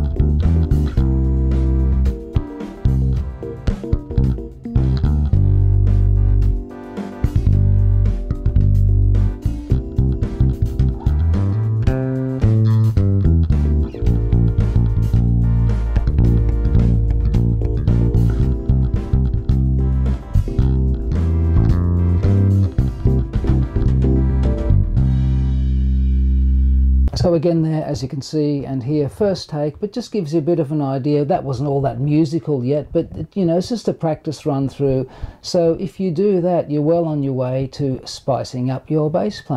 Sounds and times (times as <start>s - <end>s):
Bass guitar: 0.0s - 27.4s.